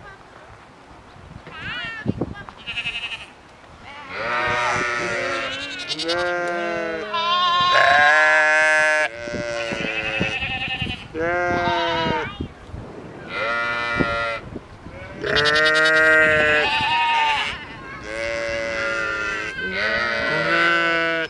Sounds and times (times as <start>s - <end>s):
Bleat: 1.5s - 12.4s, 13.3s - 21.2s
Speech: 1.6s - 2.7s, 3.8s - 5.5s.